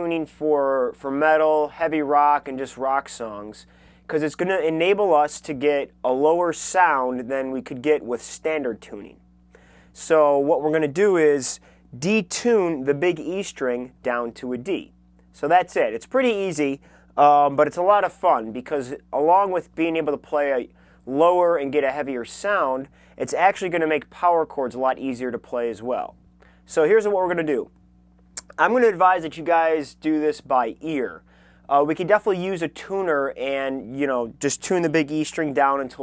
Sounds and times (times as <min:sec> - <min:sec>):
Speech: 0:00.0 - 0:09.2, 0:10.0 - 0:27.7, 0:28.4 - 0:36.0.